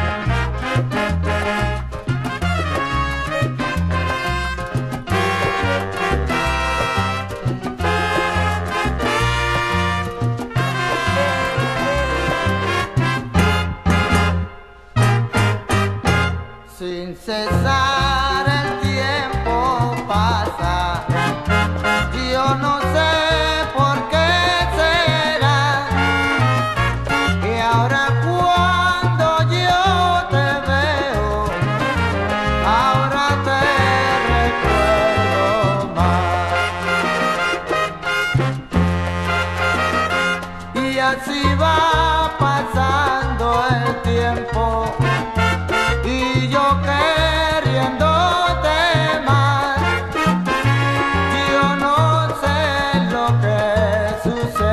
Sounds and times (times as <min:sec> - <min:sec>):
Orchestra: 0:00.0 - 0:16.5, 0:31.5 - 0:41.6, 0:45.0 - 0:52.4.